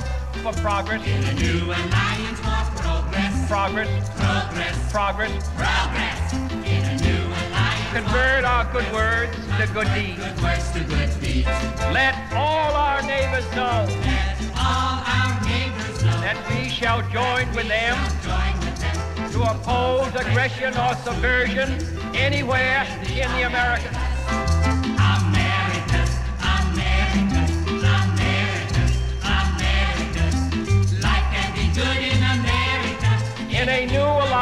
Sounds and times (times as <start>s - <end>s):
Music: 0.0s - 34.4s
Speech: 12.4s - 14.0s, 19.5s - 23.9s.